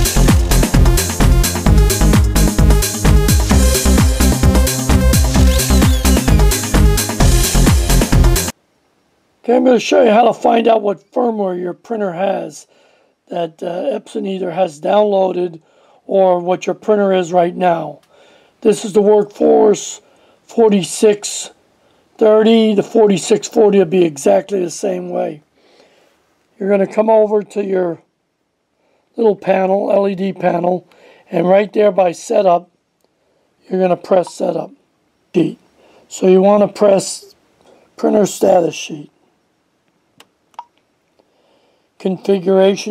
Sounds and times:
Speech: 0:09.4 - 0:12.7, 0:13.3 - 0:18.0, 0:18.6 - 0:21.6, 0:22.2 - 0:25.4, 0:26.6 - 0:28.1, 0:29.2 - 0:32.7, 0:33.6 - 0:37.4, 0:38.0 - 0:39.1, 0:42.0 - 0:42.9.

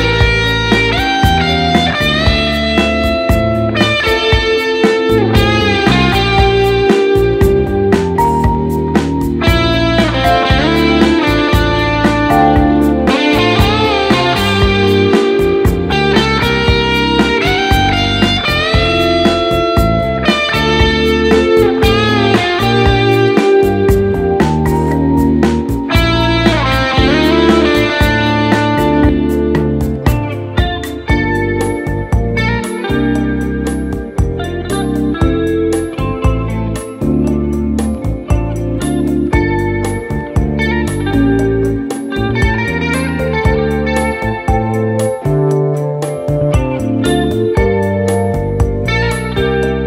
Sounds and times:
Strum: 0:00.0 - 0:49.8.

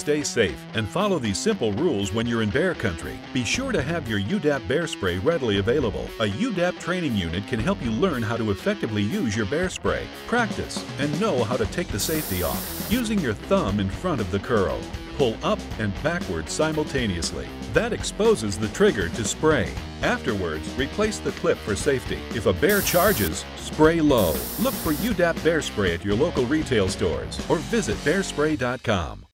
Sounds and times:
Music: 0:00.0 - 0:29.3
Speech: 0:00.0 - 0:29.3
Spray: 0:12.0 - 0:13.1, 0:22.7 - 0:23.4, 0:24.2 - 0:25.2.

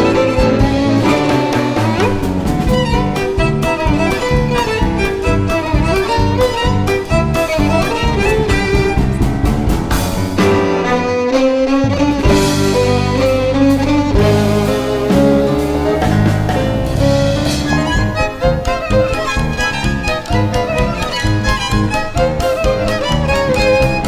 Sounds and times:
Violin, fiddle: 0:00.0 - 0:24.0.

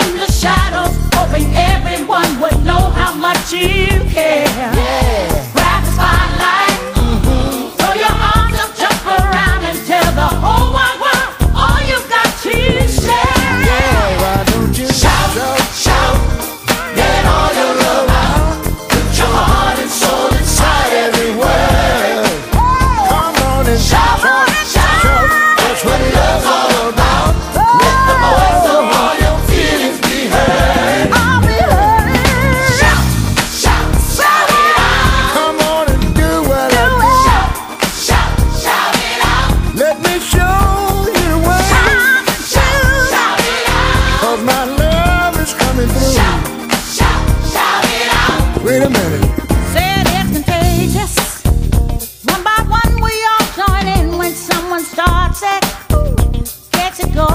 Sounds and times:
Singing: 0:00.0 - 0:49.2
Funk: 0:11.5 - 0:35.4, 0:44.8 - 0:53.2.

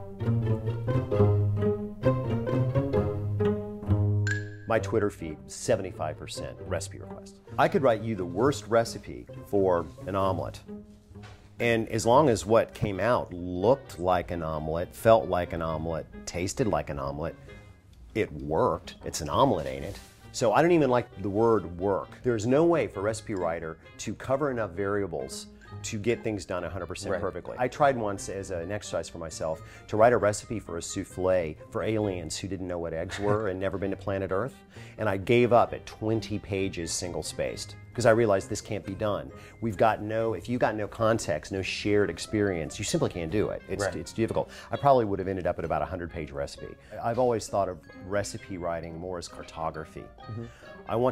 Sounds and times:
Music: 0:00.0 - 0:51.1
Speech: 0:04.7 - 0:10.6, 0:11.6 - 0:17.3, 0:18.2 - 0:51.1.

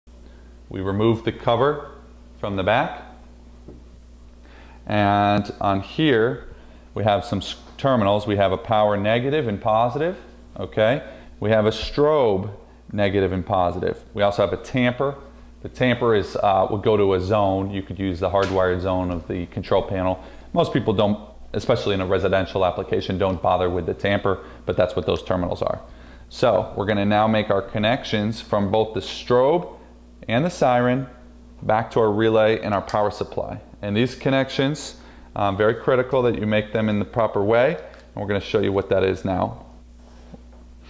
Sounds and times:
Speech: 0:00.7 - 0:03.2, 0:04.8 - 0:39.7.

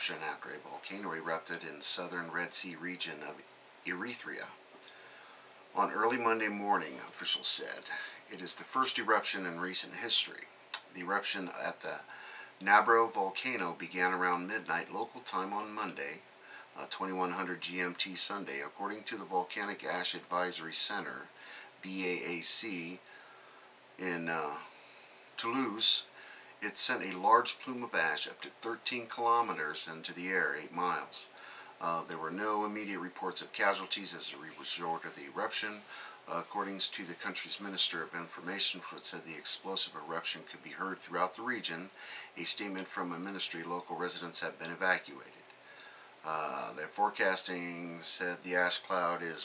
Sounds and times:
Speech: 0:00.0 - 0:04.6, 0:05.8 - 0:16.2, 0:16.8 - 0:23.1, 0:24.0 - 0:24.8, 0:25.4 - 0:45.4, 0:46.2 - 0:49.4.

